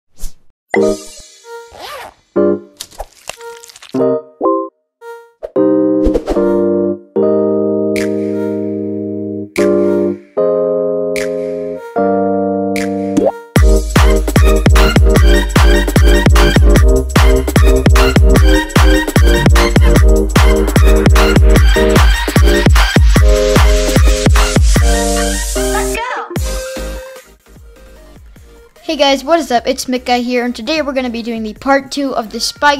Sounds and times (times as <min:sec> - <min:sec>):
Music: 0:00.7 - 0:02.8, 0:04.0 - 0:32.7.